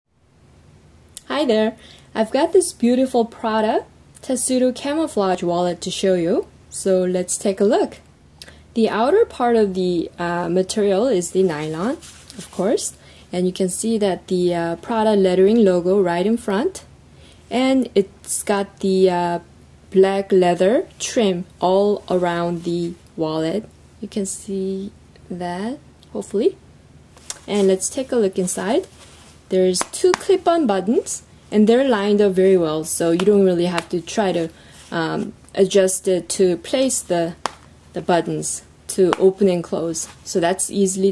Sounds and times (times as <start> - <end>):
Speech: 1.2 - 8.0, 8.8 - 16.9, 17.5 - 26.6, 27.3 - 28.9, 29.5 - 37.4, 38.0 - 41.1.